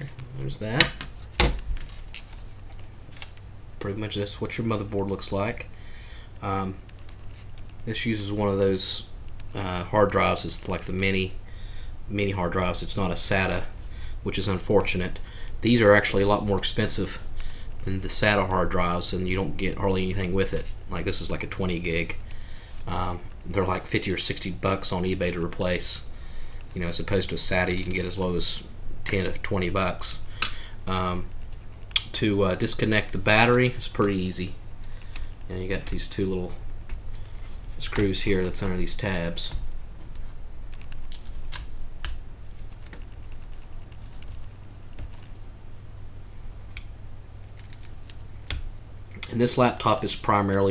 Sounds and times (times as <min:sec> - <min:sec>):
Speech: 0:00.0 - 0:01.0, 0:03.8 - 0:05.7, 0:06.4 - 0:06.8, 0:07.8 - 0:11.4, 0:12.1 - 0:17.2, 0:17.8 - 0:22.2, 0:22.9 - 0:26.1, 0:26.7 - 0:30.2, 0:30.9 - 0:31.3, 0:32.1 - 0:34.6, 0:35.5 - 0:36.6, 0:37.8 - 0:39.6, 0:49.2 - 0:50.7
Inside, small room: 0:00.0 - 0:50.7.